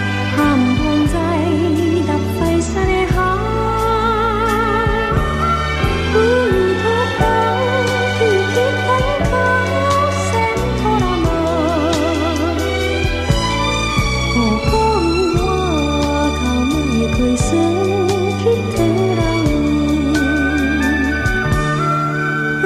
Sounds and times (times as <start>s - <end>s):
Music: 0.0s - 22.6s.